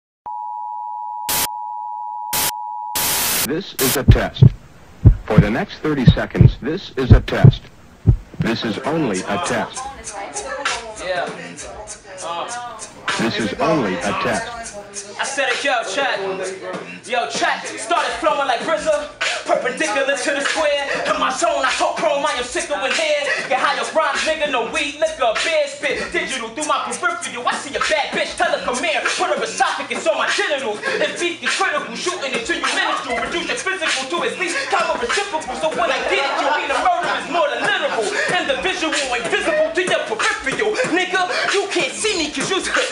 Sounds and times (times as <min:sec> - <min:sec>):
Speech: 0:03.5 - 0:04.6, 0:05.2 - 0:07.7, 0:08.4 - 0:18.8
Music: 0:09.8 - 0:13.2, 0:14.6 - 0:36.1, 0:36.7 - 0:42.9.